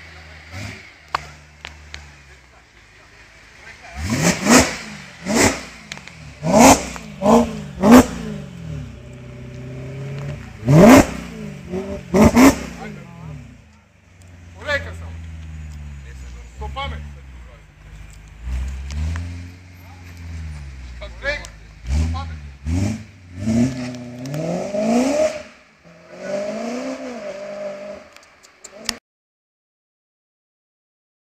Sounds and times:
Speech: 0:02.0 - 0:04.2, 0:12.7 - 0:13.5, 0:14.5 - 0:15.2, 0:16.0 - 0:17.7, 0:21.0 - 0:22.4.

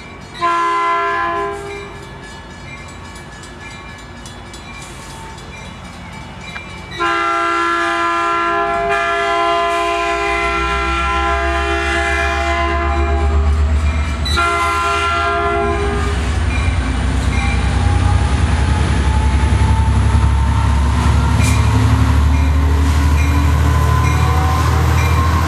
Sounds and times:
Steam whistle: 0:07.0 - 0:13.6, 0:23.4 - 0:25.4.

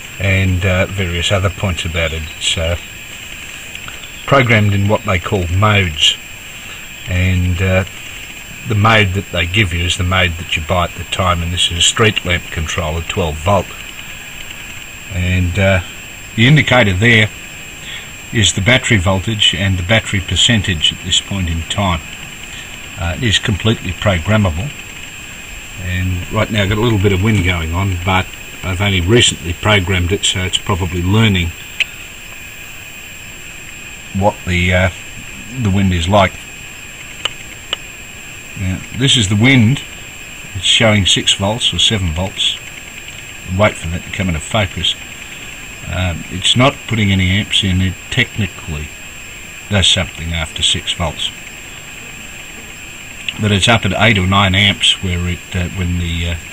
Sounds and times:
Speech: 0:00.2 - 0:02.9, 0:04.3 - 0:06.2, 0:07.1 - 0:07.9, 0:08.6 - 0:13.8, 0:15.1 - 0:17.4, 0:18.3 - 0:22.1, 0:22.9 - 0:24.8, 0:25.8 - 0:31.6, 0:34.1 - 0:36.4, 0:38.6 - 0:39.9, 0:40.5 - 0:42.6, 0:43.5 - 0:45.0, 0:45.8 - 0:49.0, 0:49.7 - 0:51.4, 0:53.3 - 0:56.4.

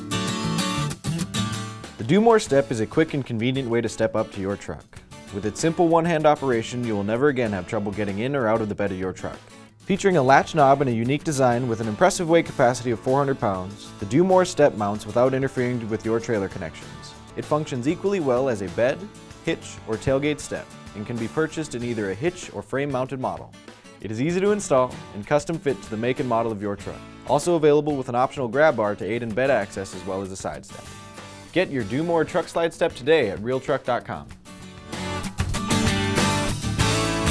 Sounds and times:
Music: 0:00.0 - 0:37.3
Speech: 0:02.0 - 0:30.9, 0:31.5 - 0:34.4.

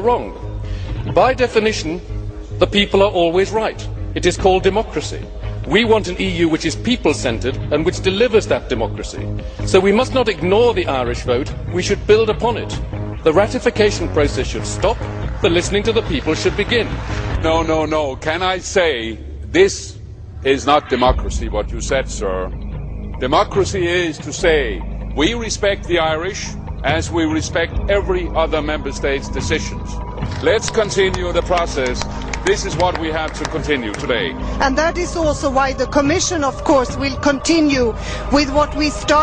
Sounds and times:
Speech: 0:01.1 - 0:02.0, 0:02.6 - 0:22.5, 0:23.2 - 0:39.2.

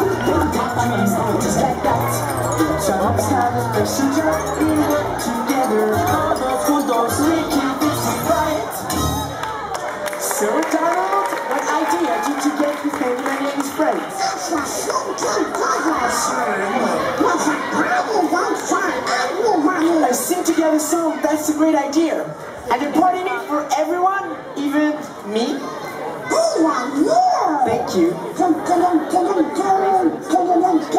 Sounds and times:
Speech: 0:10.2 - 0:30.9.

